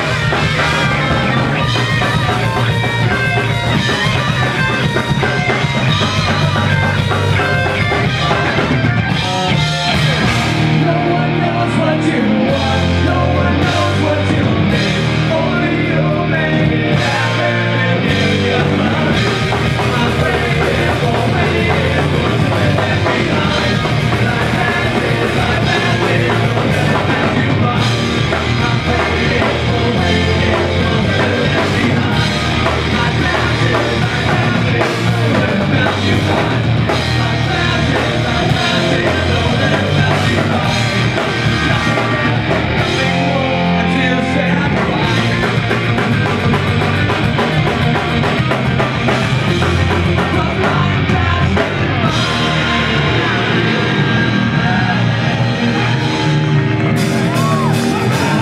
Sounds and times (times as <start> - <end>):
Music: 0.0 - 58.4
Singing: 0.0 - 58.4.